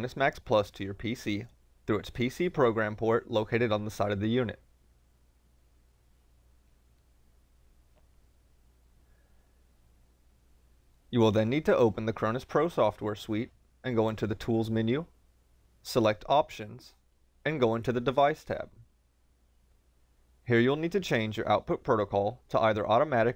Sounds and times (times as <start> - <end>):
Speech: 0.0 - 4.6, 11.1 - 15.2, 15.8 - 18.8, 20.5 - 23.3.